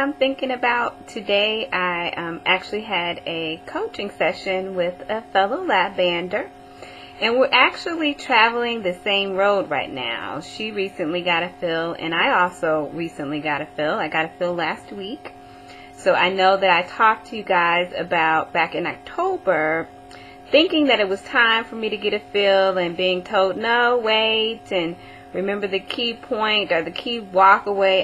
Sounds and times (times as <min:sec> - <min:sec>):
Speech: 0:00.0 - 0:15.3, 0:15.9 - 0:19.9, 0:20.5 - 0:28.0.